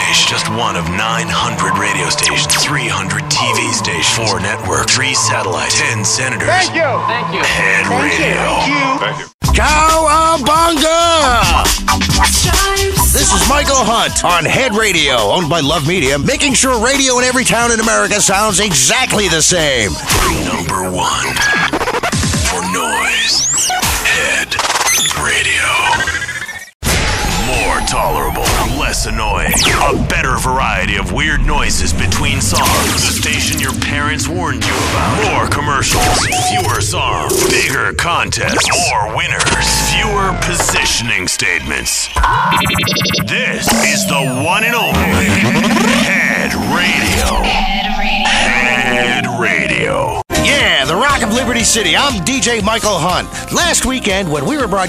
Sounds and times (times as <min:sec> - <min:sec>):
Speech: 0:00.0 - 0:11.8, 0:13.0 - 0:21.5, 0:22.4 - 0:23.3, 0:24.0 - 0:26.0, 0:27.4 - 0:42.2, 0:43.2 - 0:47.6, 0:48.3 - 0:54.8
Music: 0:00.0 - 0:30.0, 0:43.8 - 0:47.4, 0:50.2 - 0:54.8.